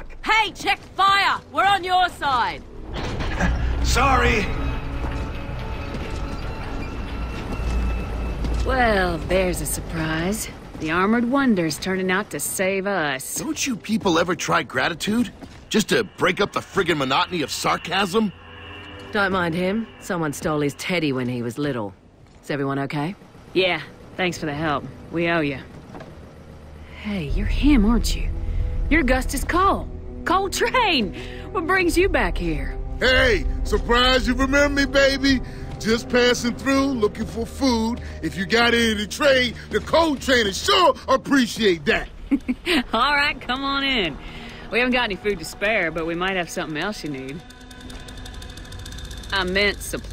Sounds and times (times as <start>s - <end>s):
Music: 0.2s - 21.6s, 23.7s - 50.1s.